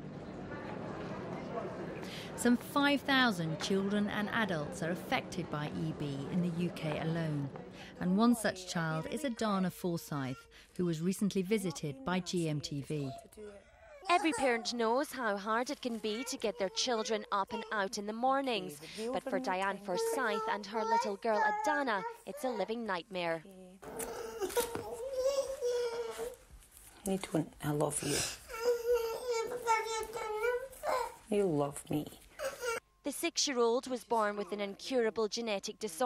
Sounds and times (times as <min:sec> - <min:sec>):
Child speech, kid speaking: 0:08.9 - 0:10.4, 0:11.6 - 0:14.9, 0:15.8 - 0:18.1, 0:19.1 - 0:23.0, 0:28.5 - 0:31.2.